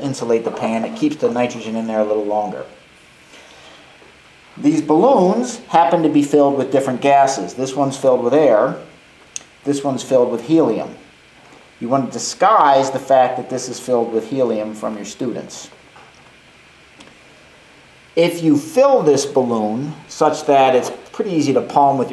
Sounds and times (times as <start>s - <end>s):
Speech: 0.0s - 2.8s, 4.6s - 9.0s, 9.6s - 11.1s, 11.8s - 15.8s, 18.2s - 22.1s.